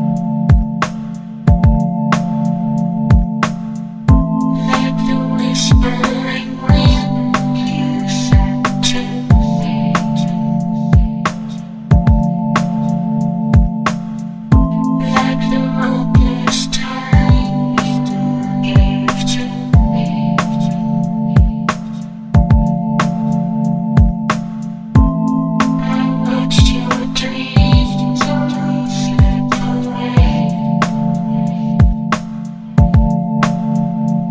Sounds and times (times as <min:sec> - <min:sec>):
Music: 0:00.0 - 0:34.3.